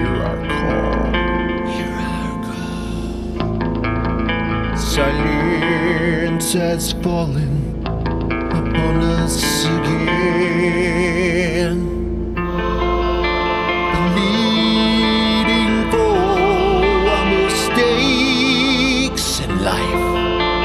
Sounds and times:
Music: 0.0 - 20.6.

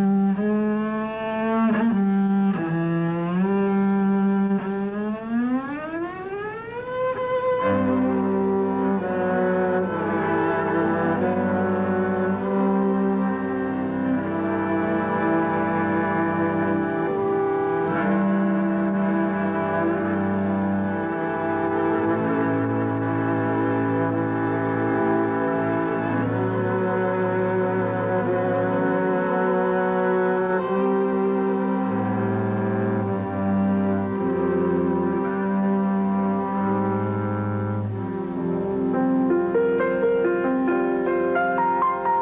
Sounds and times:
Music: 0.0 - 42.2.

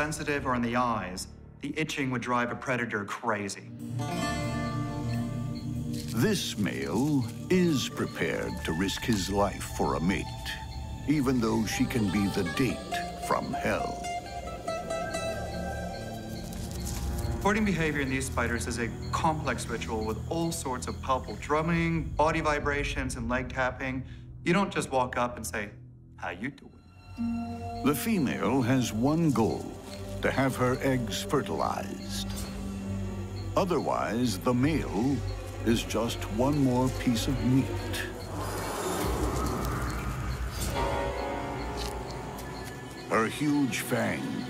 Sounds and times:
Speech: 0.0 - 3.7, 6.2 - 14.0, 17.4 - 26.7, 27.8 - 32.4, 33.6 - 38.2, 43.1 - 44.4
Music: 0.0 - 44.4.

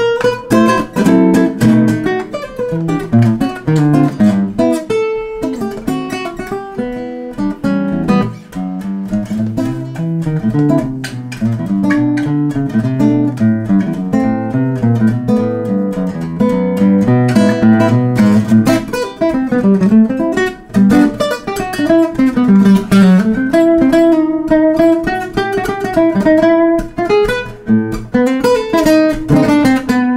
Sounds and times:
Acoustic guitar: 0.0 - 30.1
Strum: 0.0 - 30.1.

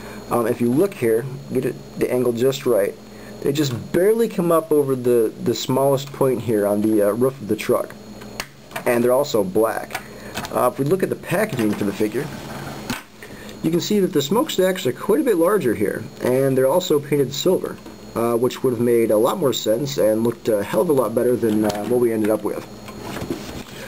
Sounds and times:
Speech: 0.3 - 8.0, 8.8 - 12.4, 13.6 - 22.7.

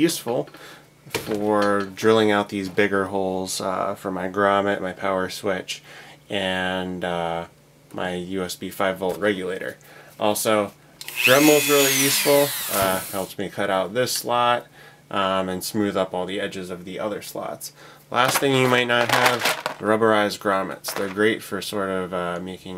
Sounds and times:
Drill: 11.0 - 13.3.

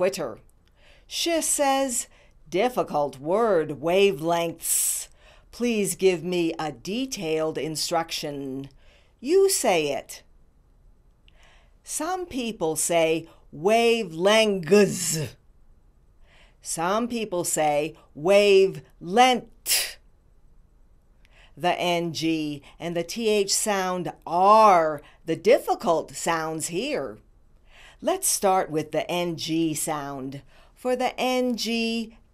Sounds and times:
Female speech, woman speaking: 0.0 - 0.4, 1.1 - 10.2, 11.9 - 15.4, 16.7 - 20.0, 21.6 - 27.2, 28.0 - 32.2
Narration, monologue: 0.0 - 32.3.

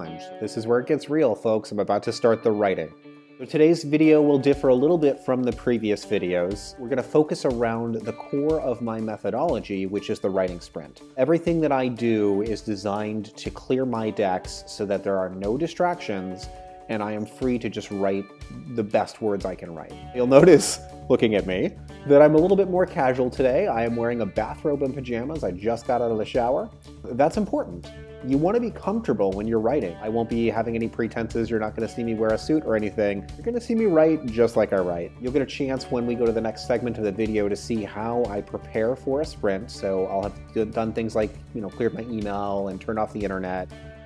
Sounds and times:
Speech: 0.0 - 43.7
Music: 0.0 - 44.0.

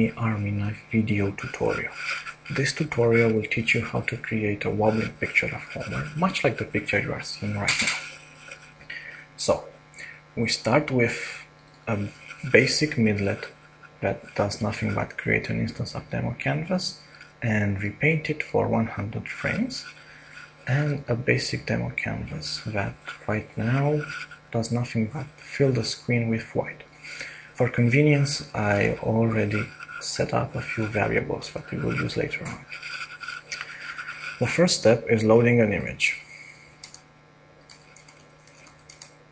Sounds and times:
Speech: 0.0 - 8.2, 9.4 - 20.0, 20.6 - 36.3.

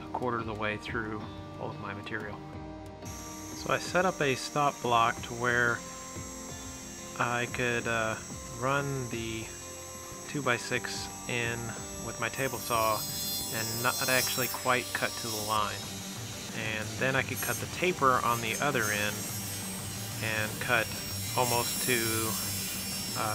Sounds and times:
Music: 0.0 - 23.3
Speech: 0.1 - 2.4, 3.6 - 5.8, 7.2 - 9.5, 10.3 - 15.8, 16.6 - 19.2, 20.2 - 22.4.

